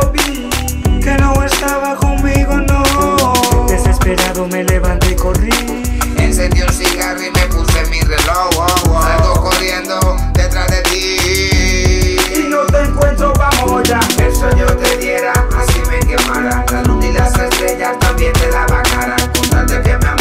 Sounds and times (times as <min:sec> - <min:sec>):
Music: 0:00.0 - 0:20.2.